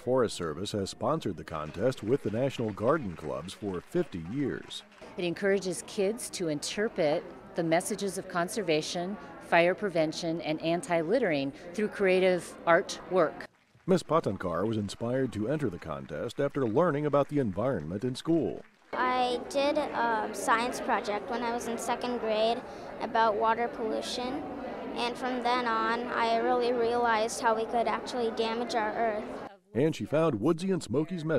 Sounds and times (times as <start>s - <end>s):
Speech: 0.0s - 31.3s.